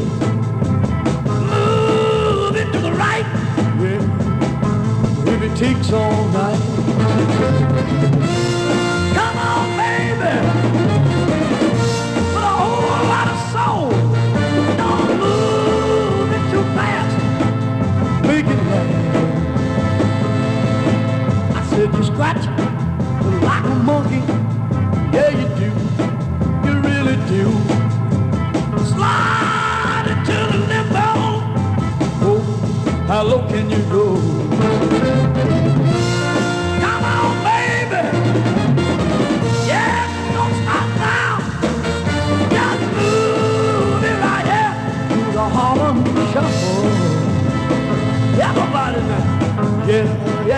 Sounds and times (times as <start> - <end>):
Music: 0.0 - 50.5.